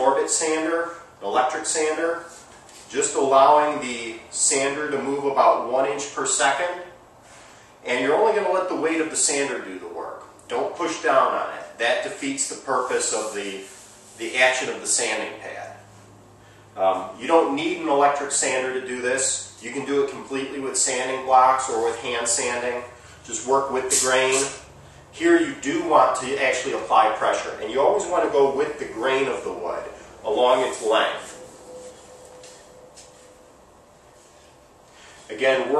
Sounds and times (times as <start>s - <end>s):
Speech: 0.0s - 7.0s, 7.8s - 15.8s, 16.8s - 31.4s, 35.3s - 35.7s.